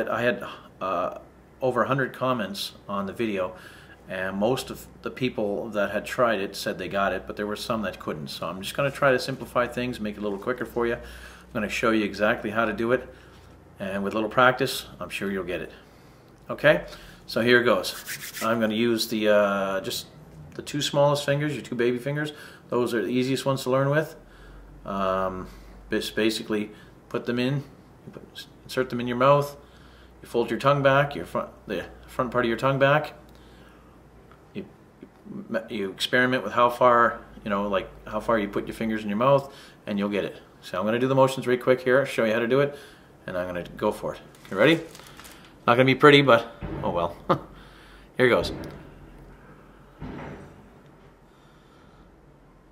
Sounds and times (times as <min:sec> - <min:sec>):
Speech: 0:00.0 - 0:13.2, 0:13.8 - 0:15.8, 0:16.5 - 0:24.2, 0:24.8 - 0:29.6, 0:30.2 - 0:33.2, 0:34.5 - 0:44.9, 0:45.7 - 0:47.4, 0:48.2 - 0:48.8.